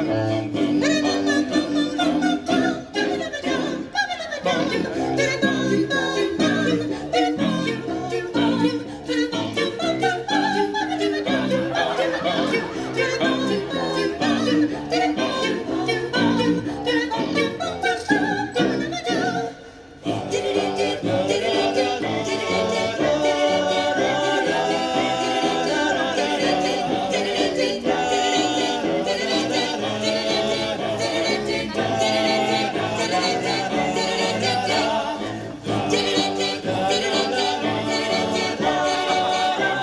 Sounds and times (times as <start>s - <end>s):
Choir: 0.0s - 39.8s.